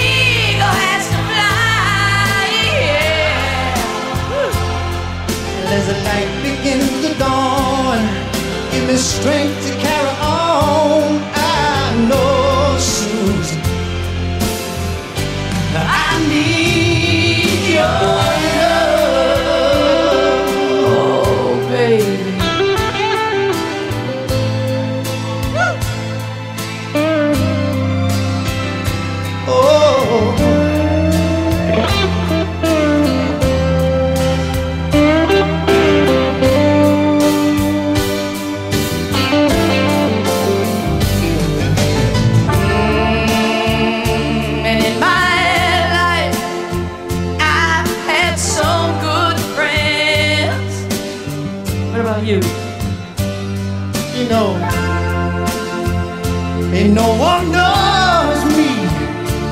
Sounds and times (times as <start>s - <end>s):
Inside, public space: 0.0s - 59.5s
Pop music: 0.0s - 59.5s
Steel guitar, slide guitar: 0.0s - 59.5s.